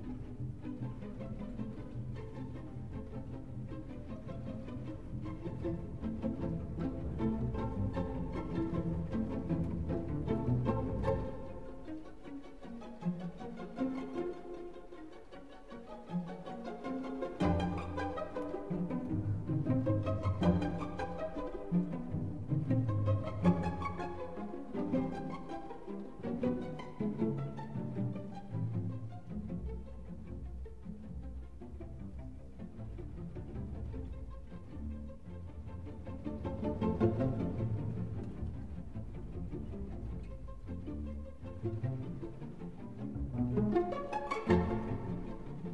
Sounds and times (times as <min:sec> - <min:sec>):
Violin, fiddle: 0:00.0 - 0:45.7.